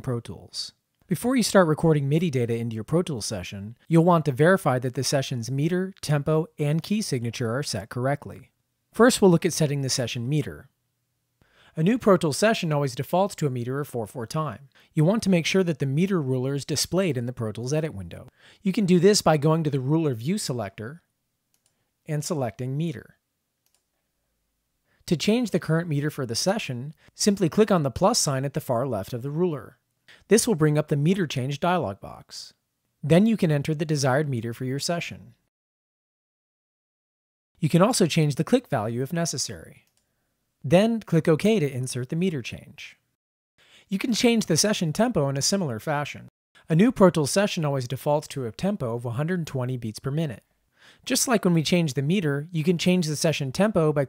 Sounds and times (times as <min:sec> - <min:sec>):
Speech: 0:00.0 - 0:10.7, 0:11.7 - 0:21.1, 0:22.1 - 0:23.2, 0:25.1 - 0:35.4, 0:37.6 - 0:39.9, 0:40.7 - 0:43.0, 0:43.9 - 0:50.4, 0:51.0 - 0:54.0.